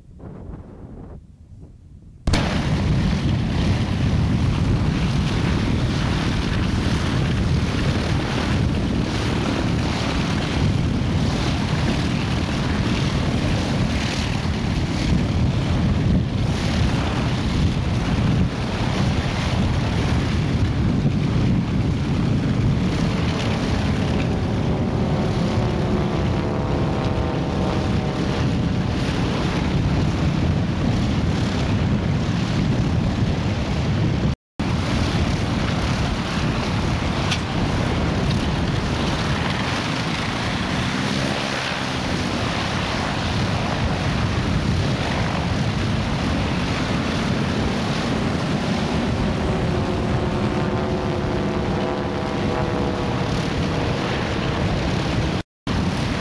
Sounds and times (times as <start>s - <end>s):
Engine: 2.2s - 56.2s
Vehicle: 2.3s - 56.2s.